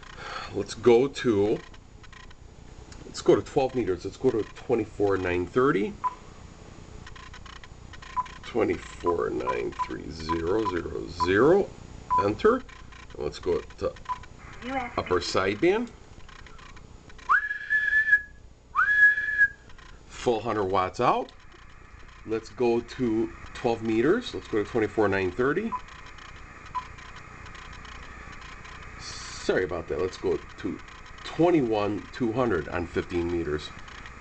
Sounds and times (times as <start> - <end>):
Radio: 8.5 - 11.6, 14.6 - 15.9, 20.2 - 34.2
Whistle: 17.2 - 19.6.